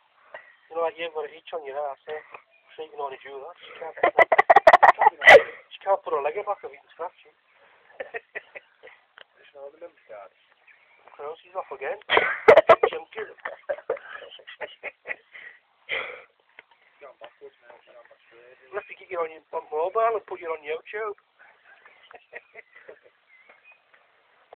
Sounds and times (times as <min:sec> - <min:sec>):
Speech: 0:00.7 - 0:04.0, 0:17.0 - 0:21.2.